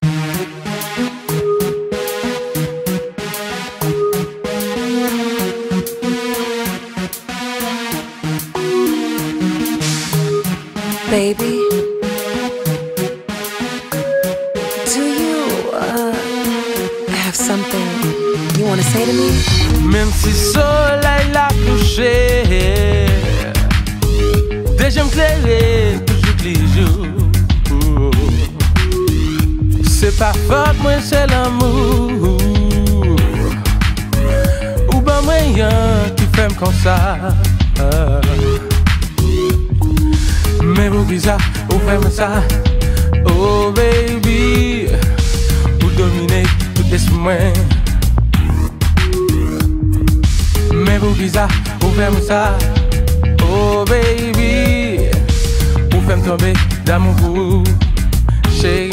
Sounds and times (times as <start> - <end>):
Jazz: 18.0 - 58.9.